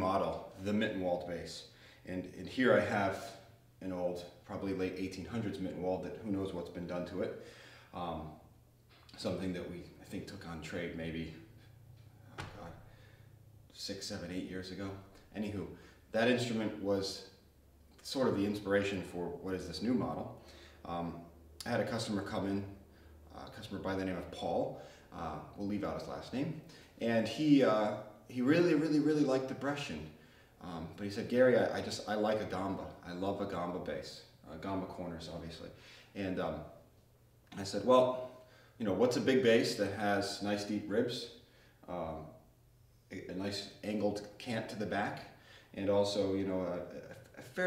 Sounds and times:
Speech: 0.0s - 8.4s, 9.1s - 11.5s, 12.4s - 12.9s, 13.7s - 17.4s, 18.0s - 36.8s, 37.5s - 42.4s, 43.1s - 47.6s.

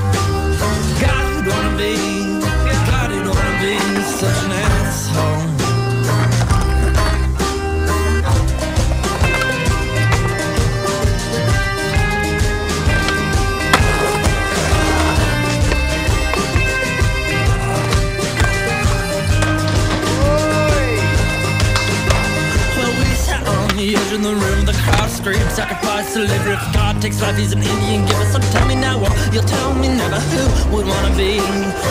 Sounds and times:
Music: 0.0s - 31.9s
Skateboard: 1.5s - 7.6s, 8.2s - 11.0s, 12.3s - 25.9s, 27.7s - 31.9s.

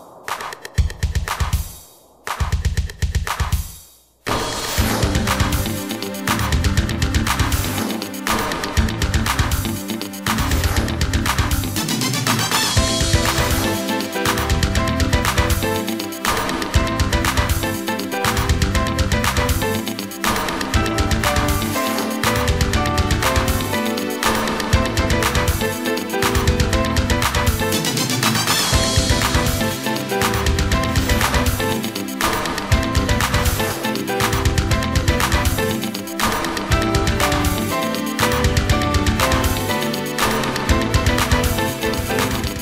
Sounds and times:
Music: 0.0s - 42.6s.

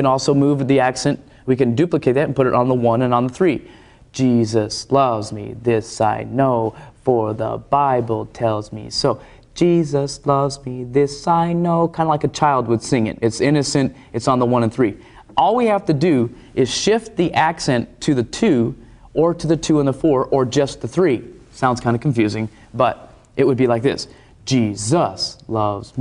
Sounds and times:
Speech: 0.0s - 26.0s.

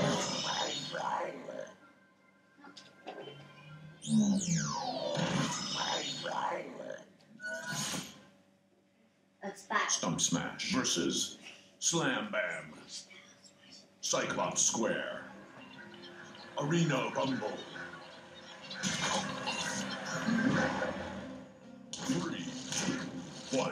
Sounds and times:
Speech: 9.4s - 13.2s, 14.0s - 15.3s, 16.6s - 17.7s, 22.0s - 22.6s, 23.5s - 23.7s.

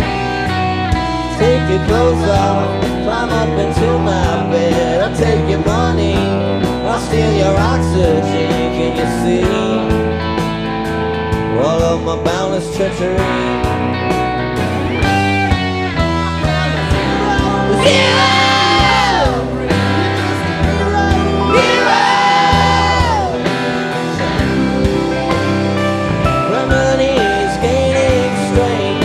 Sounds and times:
Music: 0.0s - 29.0s.

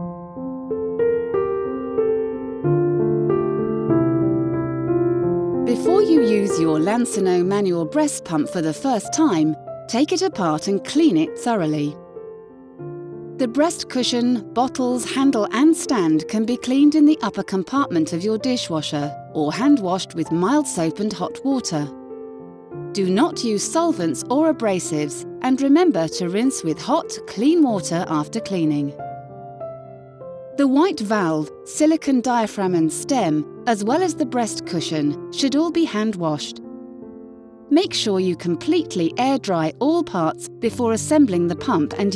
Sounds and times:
Music: 0.0s - 42.1s
Speech: 5.7s - 12.0s, 13.4s - 21.9s, 23.0s - 29.0s, 30.6s - 36.6s, 37.7s - 42.1s.

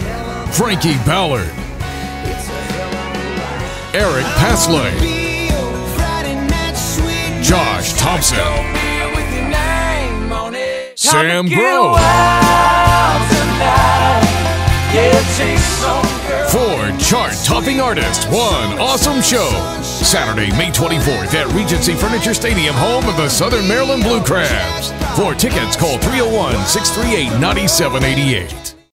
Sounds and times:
Speech: 0.5s - 1.6s, 4.0s - 5.1s, 7.4s - 8.7s, 11.0s - 12.0s, 16.5s - 28.8s.

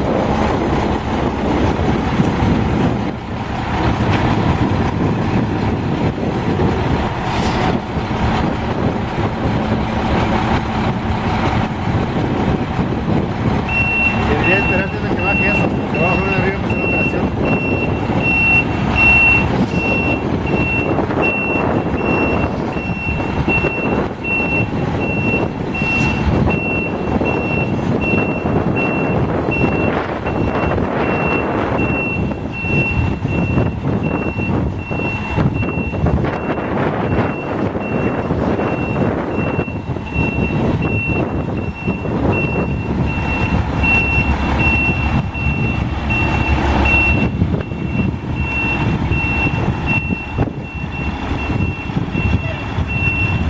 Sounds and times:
Reversing beeps: 13.7s - 53.4s
Speech: 14.3s - 17.4s, 52.4s - 52.7s.

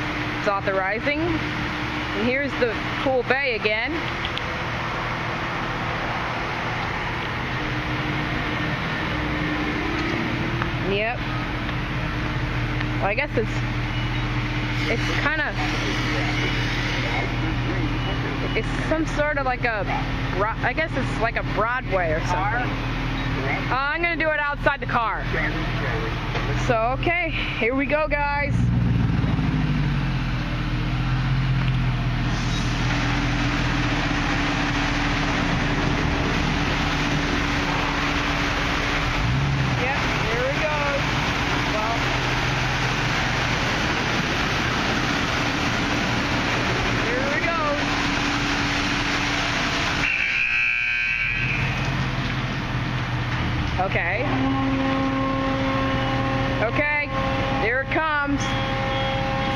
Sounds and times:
Car: 0.0s - 59.5s.

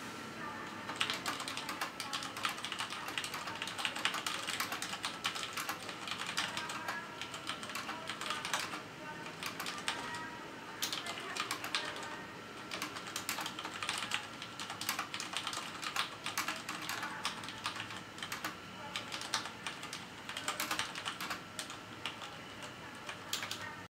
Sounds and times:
Speech: 0.2s - 23.9s.

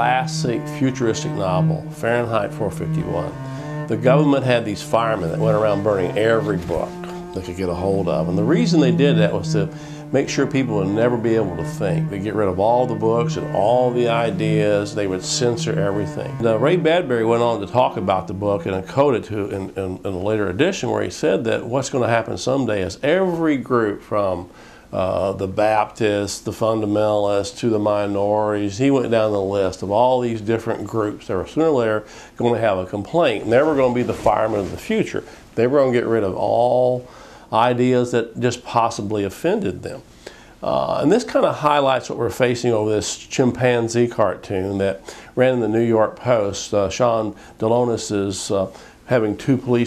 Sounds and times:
Male speech, man speaking: 0.0s - 40.0s, 40.6s - 49.8s.

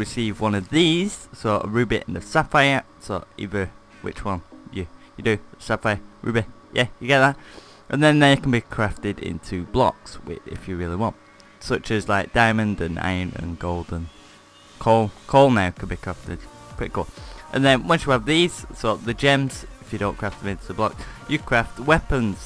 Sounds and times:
Speech: 0.0s - 14.1s, 14.8s - 22.4s
Music: 0.0s - 22.4s.

